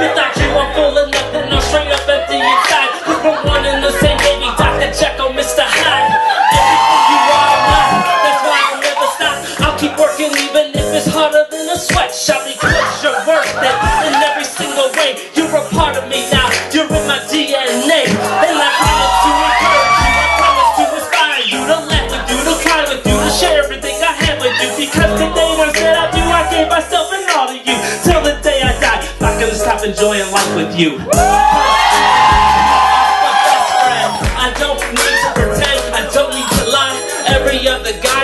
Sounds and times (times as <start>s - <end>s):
Rapping: 0.0s - 31.3s, 33.8s - 38.2s
Song: 0.0s - 38.2s.